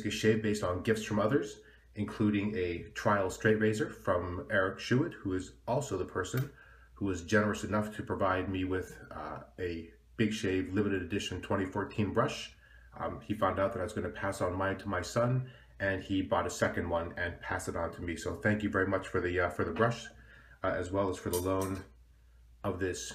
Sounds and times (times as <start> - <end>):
Speech: 0.0 - 22.0, 22.6 - 23.1.